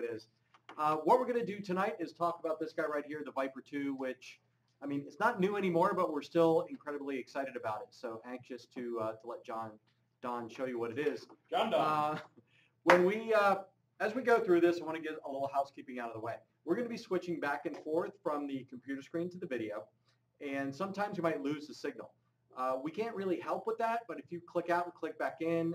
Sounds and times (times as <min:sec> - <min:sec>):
Speech: 0:00.0 - 0:12.2, 0:12.9 - 0:25.7.